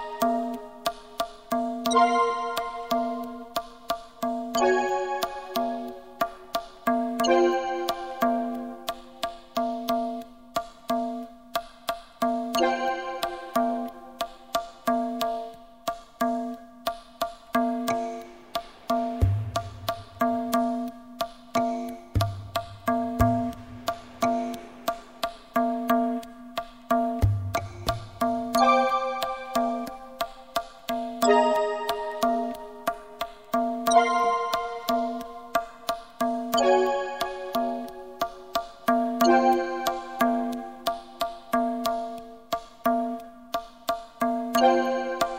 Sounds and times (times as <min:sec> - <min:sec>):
Music: 0:00.0 - 0:45.3.